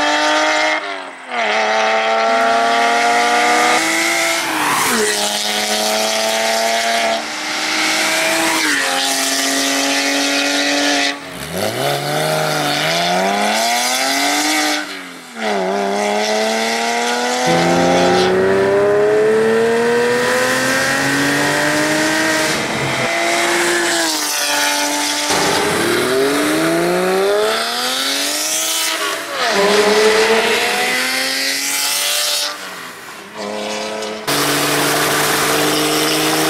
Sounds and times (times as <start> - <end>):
Accelerating, revving, vroom: 0.0 - 32.6, 33.4 - 36.5
Car: 0.0 - 36.5.